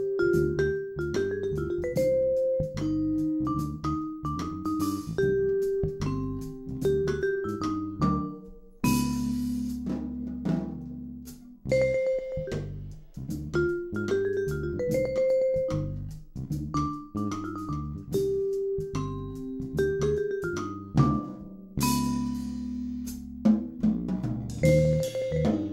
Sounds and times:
Glockenspiel: 0.0s - 9.7s, 11.7s - 12.8s, 13.6s - 16.0s, 16.8s - 22.7s, 24.6s - 25.7s
Marimba, xylophone: 0.0s - 9.8s, 11.7s - 12.8s, 13.6s - 16.0s, 16.8s - 22.6s, 24.6s - 25.7s
Drum: 0.0s - 25.7s.

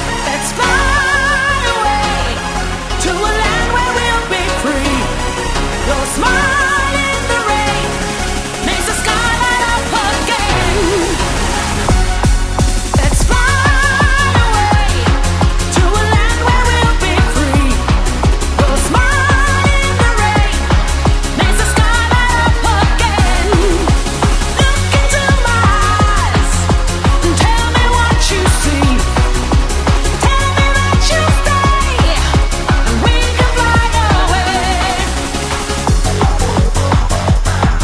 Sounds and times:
Music: 0.0s - 37.8s.

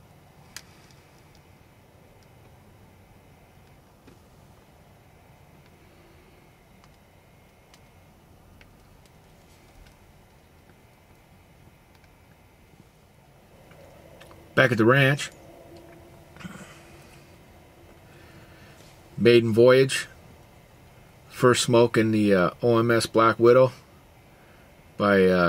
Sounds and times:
Speech: 14.6s - 15.4s, 19.2s - 20.2s, 21.3s - 23.8s, 25.0s - 25.4s.

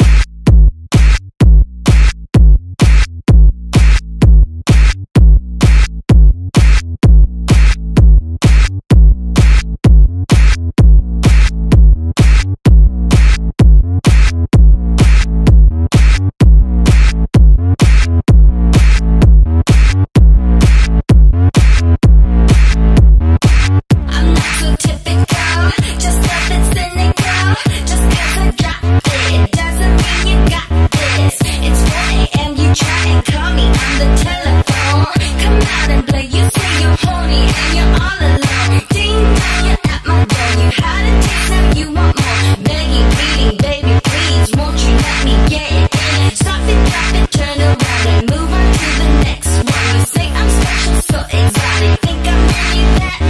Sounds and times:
Music: 0.0s - 53.3s.

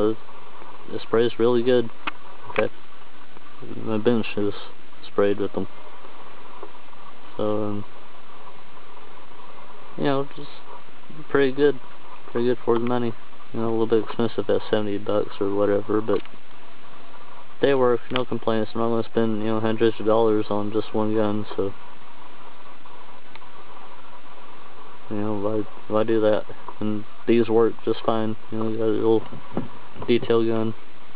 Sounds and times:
Speech: 0.0s - 0.2s, 0.9s - 2.0s, 3.6s - 5.7s, 7.4s - 7.9s, 10.0s - 10.6s, 11.2s - 16.3s, 17.6s - 21.8s, 25.1s - 29.3s, 30.0s - 30.8s.

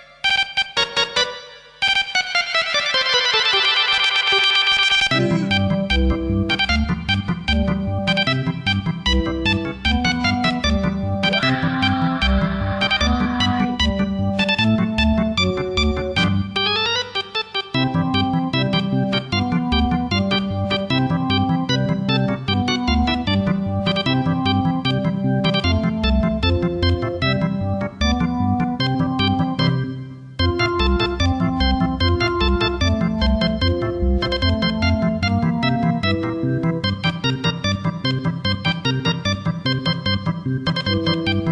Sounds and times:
Music: 0.0s - 41.5s.

